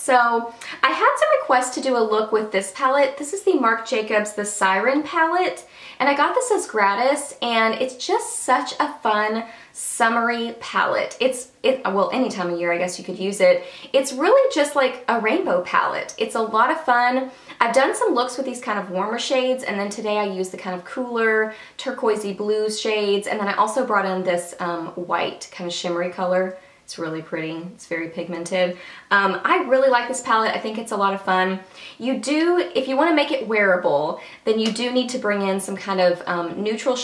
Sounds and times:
Speech: 0:00.0 - 0:37.0.

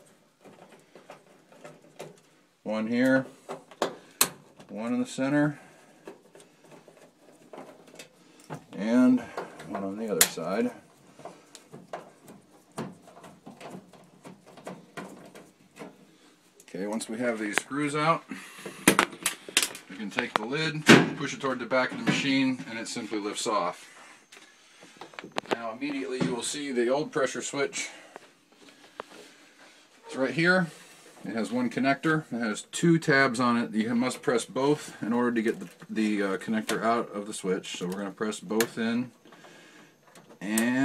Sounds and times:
Speech: 0:02.6 - 0:03.3, 0:04.7 - 0:05.6, 0:08.7 - 0:10.8, 0:16.7 - 0:18.3, 0:19.9 - 0:23.8, 0:25.5 - 0:28.0, 0:30.1 - 0:39.2, 0:40.4 - 0:40.8.

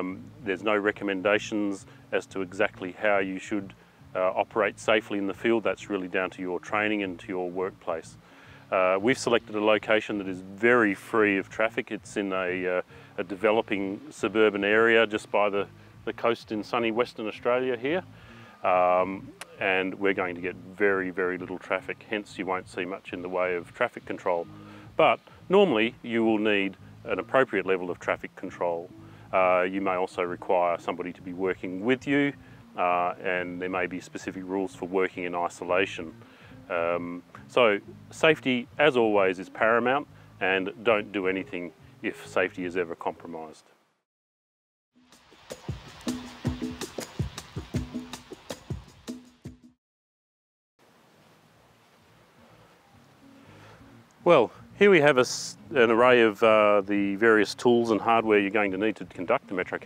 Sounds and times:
Music: 0:00.0 - 0:43.7, 0:45.0 - 0:49.8, 0:52.1 - 0:59.8
Speech: 0:00.0 - 0:43.7, 0:54.2 - 0:59.8.

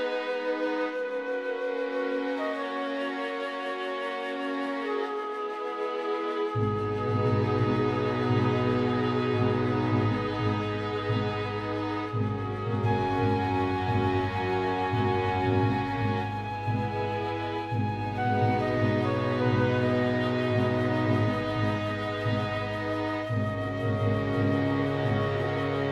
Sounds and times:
Background music: 0:00.0 - 0:25.9.

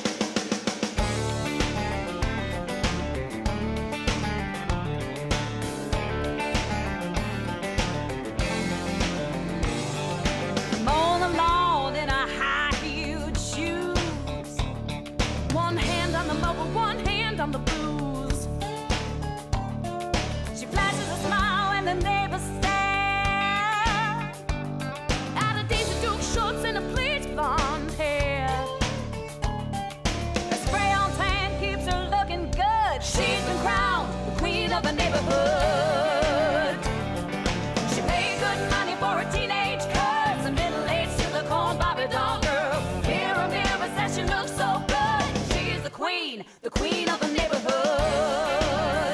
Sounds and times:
Music: 0:00.0 - 0:49.1.

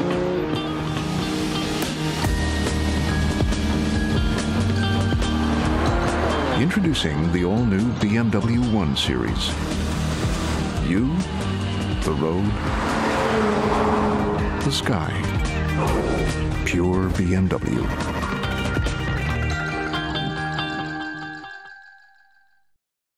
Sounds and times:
Music: 0:00.0 - 0:22.8
Speech: 0:06.6 - 0:09.5, 0:10.8 - 0:11.2, 0:12.0 - 0:12.6, 0:14.6 - 0:15.3, 0:16.6 - 0:18.0.

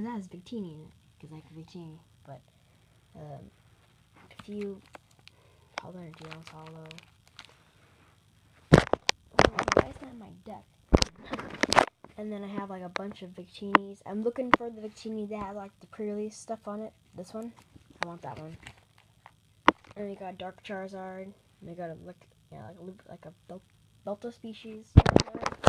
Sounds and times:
Speech: 0:00.0 - 0:02.4, 0:03.2 - 0:03.5, 0:04.3 - 0:04.8, 0:05.8 - 0:07.0, 0:09.4 - 0:10.7, 0:12.2 - 0:18.7, 0:20.0 - 0:25.0.

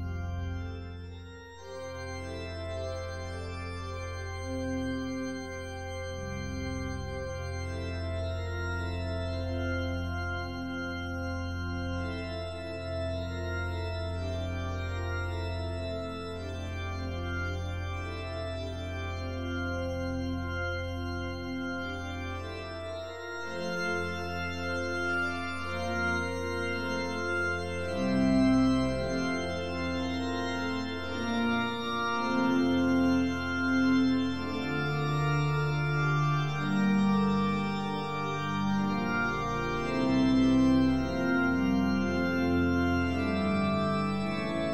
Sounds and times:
Music: 0:00.0 - 0:44.7.

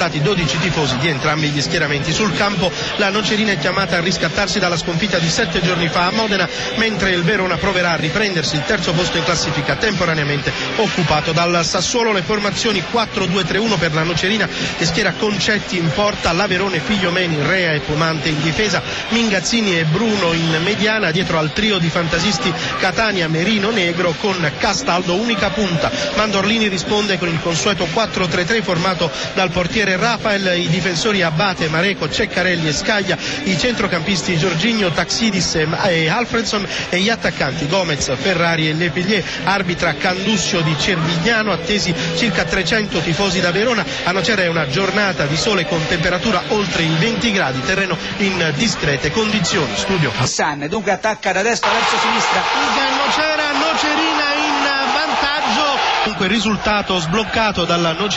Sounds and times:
Music: 0:00.0 - 0:50.4, 0:51.6 - 0:58.1
Speech: 0:00.0 - 0:58.1.

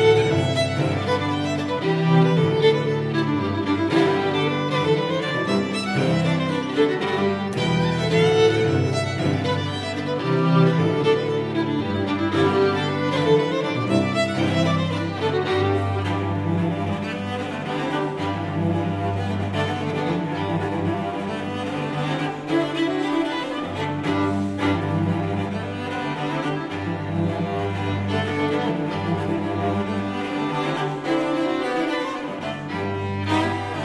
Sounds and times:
Violin, fiddle: 0:00.0 - 0:33.8.

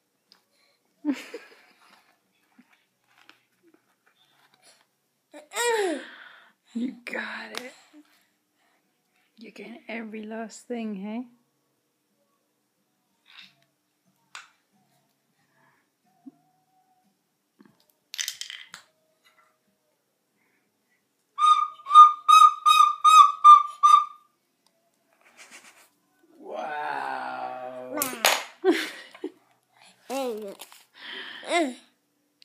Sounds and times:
Whistle: 0:21.4 - 0:24.3.

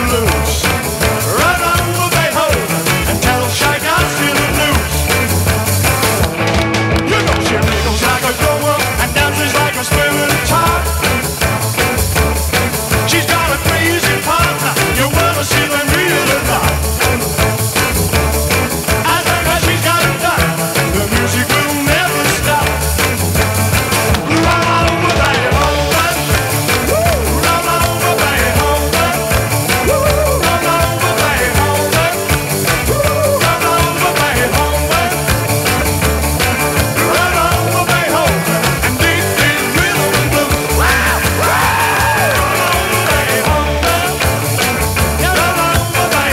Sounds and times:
Ska: 0:00.0 - 0:46.3.

